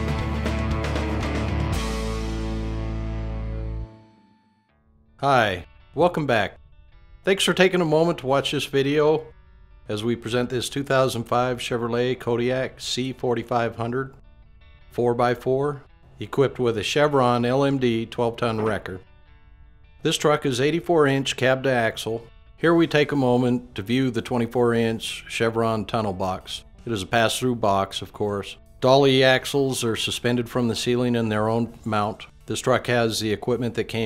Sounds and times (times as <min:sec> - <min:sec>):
Music: 0:00.0 - 0:34.0
Speech: 0:05.2 - 0:06.6, 0:07.3 - 0:09.3, 0:09.9 - 0:14.1, 0:15.0 - 0:19.0, 0:20.0 - 0:34.0.